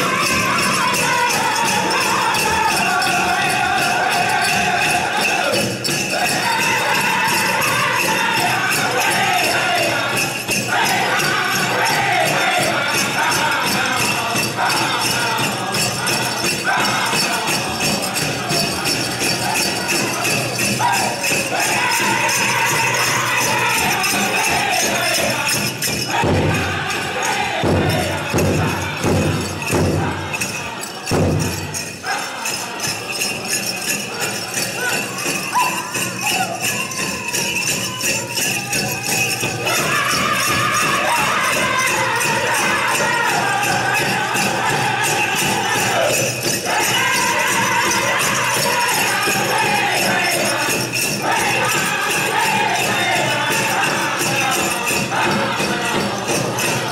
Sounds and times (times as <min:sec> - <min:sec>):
Music: 0:00.0 - 0:56.9.